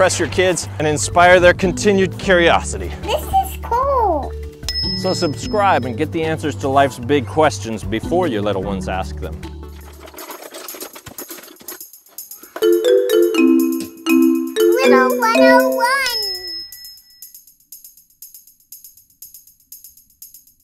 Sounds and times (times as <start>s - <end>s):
Child speech, kid speaking: 2.9s - 4.4s, 14.7s - 16.6s
Vibraphone: 4.7s - 5.9s, 12.6s - 17.0s.